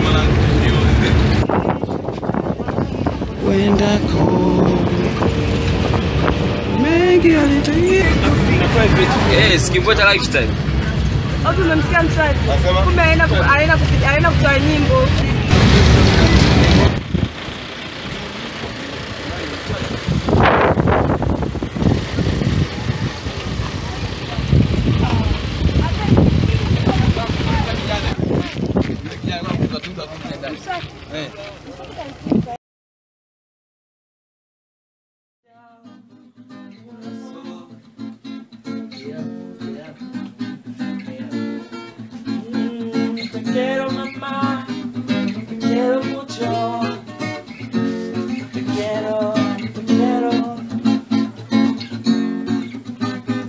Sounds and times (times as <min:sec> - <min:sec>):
Outside, rural or natural: 0:00.0 - 0:32.6.